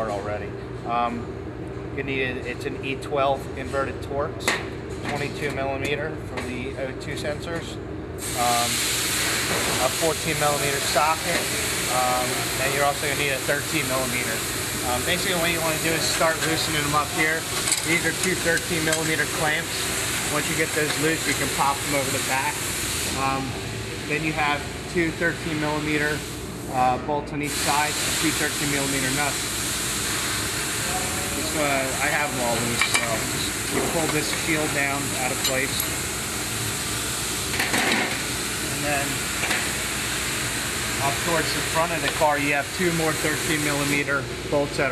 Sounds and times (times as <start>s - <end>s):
Speech: 0.0s - 1.2s, 2.0s - 7.8s, 9.8s - 22.6s, 23.2s - 29.4s, 30.9s - 35.9s, 38.7s - 39.2s, 41.0s - 44.9s.